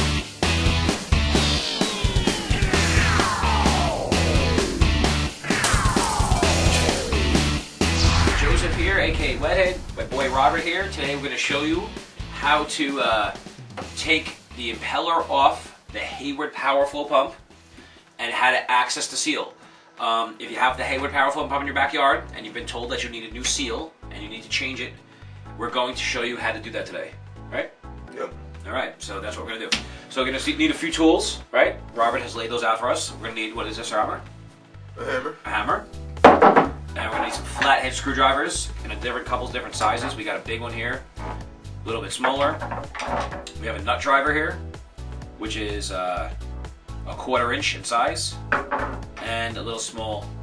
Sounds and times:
Music: 0.0s - 50.4s
Speech: 8.4s - 13.4s, 14.0s - 17.4s, 18.2s - 25.0s, 25.6s - 34.2s, 35.0s - 35.8s, 37.0s - 41.0s, 41.8s - 42.6s, 43.5s - 44.6s, 45.4s - 46.4s, 47.1s - 48.4s, 49.2s - 50.3s.

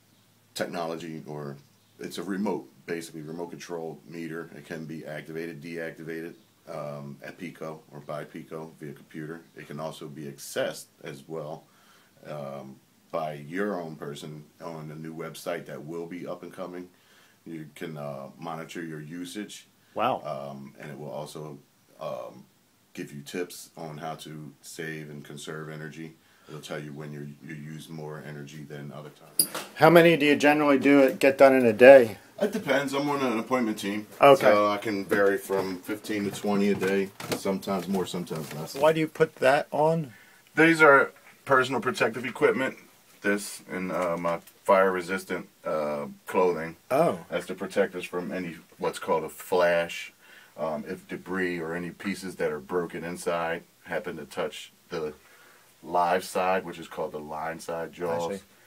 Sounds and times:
Speech: 0.6s - 11.6s, 12.2s - 16.9s, 17.5s - 55.2s, 55.8s - 58.5s.

